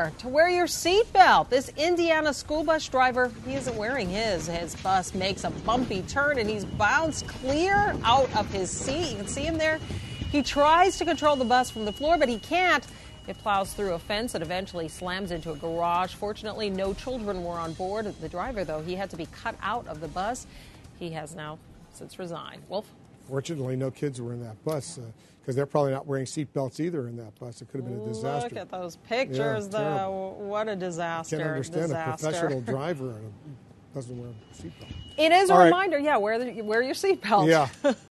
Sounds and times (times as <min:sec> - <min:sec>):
Speech: 0:23.3 - 0:30.2, 0:31.3 - 0:33.3, 0:35.2 - 0:35.8, 0:37.2 - 0:37.7.